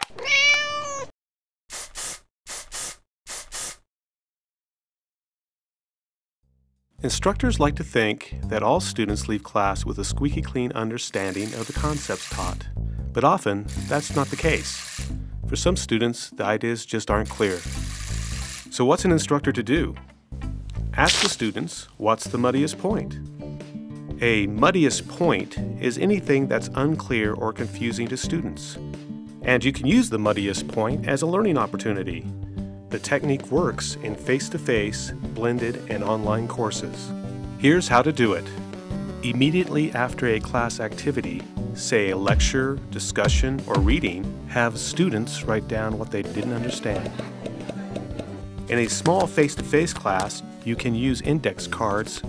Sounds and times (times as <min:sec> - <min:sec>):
Speech: 0:07.0 - 0:14.8, 0:15.5 - 0:17.7, 0:18.7 - 0:20.0, 0:21.0 - 0:23.2, 0:24.2 - 0:28.8, 0:29.4 - 0:32.2, 0:32.9 - 0:38.6, 0:39.2 - 0:47.2, 0:48.7 - 0:52.2
Music: 0:07.0 - 0:52.2.